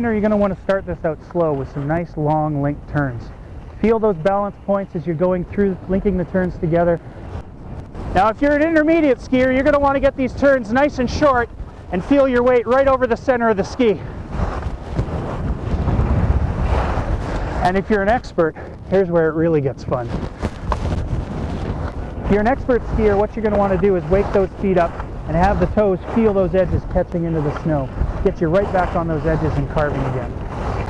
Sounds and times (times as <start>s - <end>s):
Speech: 0.0s - 7.0s, 8.1s - 14.1s, 17.6s - 20.2s, 22.2s - 30.4s
Outside, rural or natural: 0.0s - 30.8s.